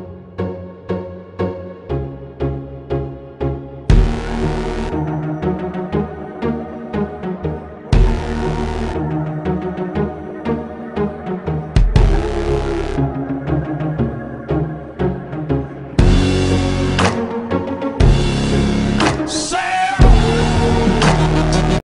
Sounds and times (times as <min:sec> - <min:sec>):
Music: 0:00.0 - 0:21.8.